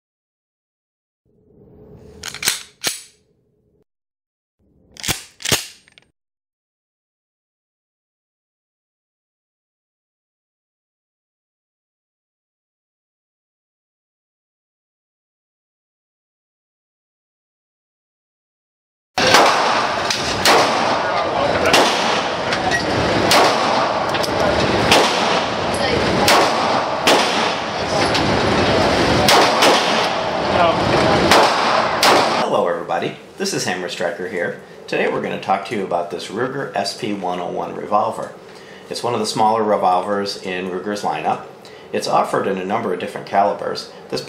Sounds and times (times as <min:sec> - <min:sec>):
Cap gun: 0:02.2 - 0:03.2, 0:05.0 - 0:06.0, 0:19.2 - 0:21.0, 0:21.6 - 0:22.3, 0:23.3 - 0:23.9, 0:24.9 - 0:25.5, 0:26.2 - 0:27.7, 0:29.3 - 0:30.2, 0:31.3 - 0:32.4.